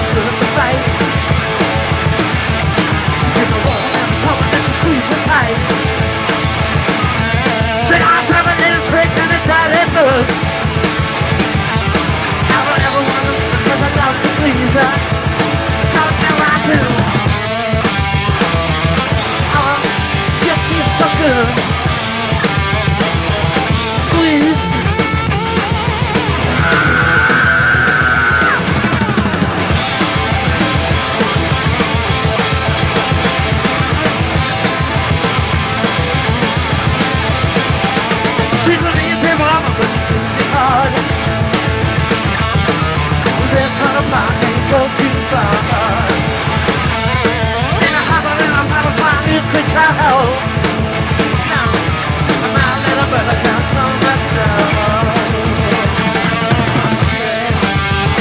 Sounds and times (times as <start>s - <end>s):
Music: 0.0s - 58.2s
Male singing: 3.3s - 5.6s, 7.8s - 10.3s, 12.5s - 15.1s, 15.9s - 17.0s, 19.5s - 21.6s, 24.1s - 24.9s, 38.6s - 41.1s, 43.4s - 46.2s, 47.8s - 50.4s, 52.4s - 56.2s.